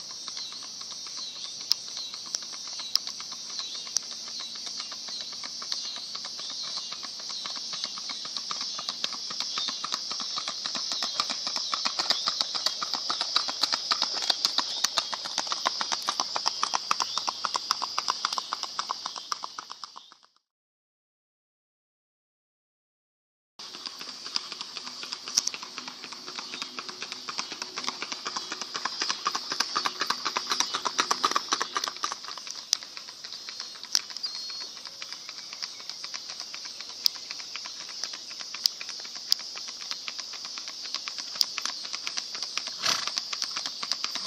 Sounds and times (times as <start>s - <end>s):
Clip-clop: 0.0s - 20.4s, 23.6s - 44.2s.